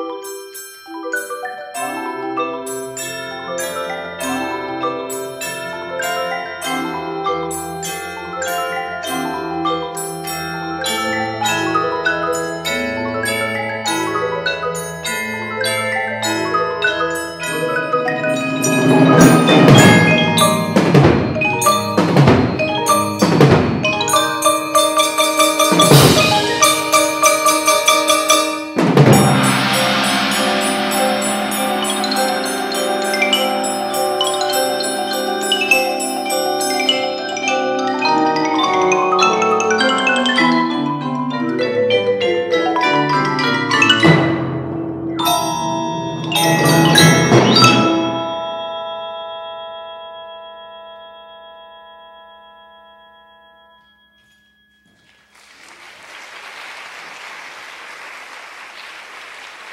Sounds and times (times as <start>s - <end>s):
Drum kit: 17.6s - 35.6s.